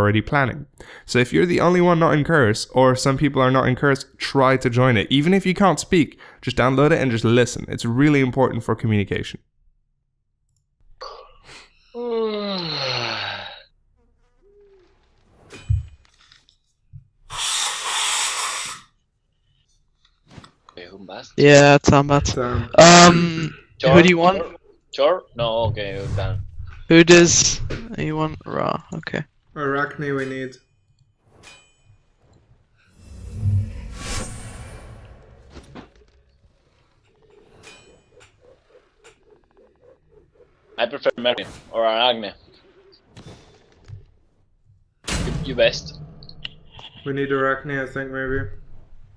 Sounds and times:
Speech: 0.0 - 9.4, 20.8 - 30.6, 40.8 - 42.4, 45.4 - 46.0, 46.8 - 48.6.

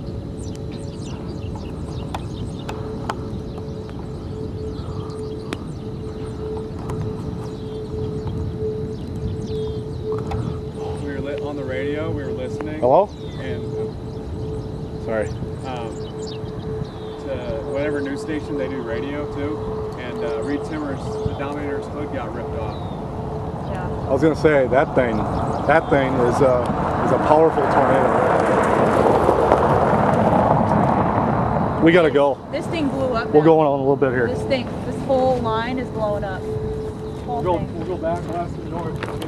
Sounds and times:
Thunder: 23.5 - 32.5.

